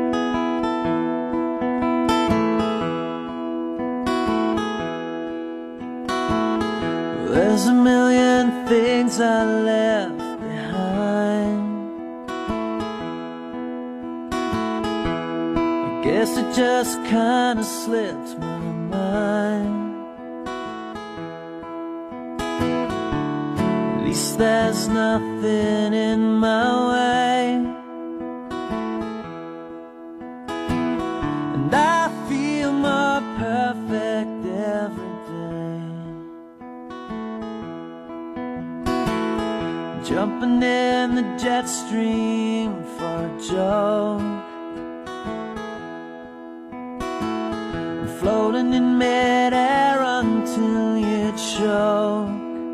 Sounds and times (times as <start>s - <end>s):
Music: 0.0s - 52.7s.